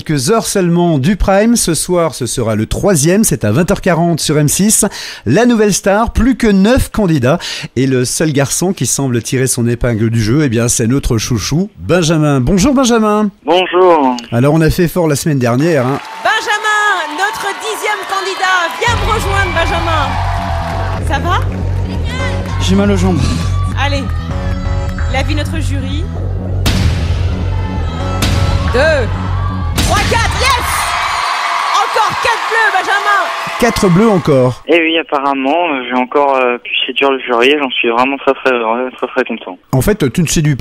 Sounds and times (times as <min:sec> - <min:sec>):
Speech: 0:00.0 - 0:16.6, 0:33.6 - 0:40.6
Music: 0:18.9 - 0:31.4.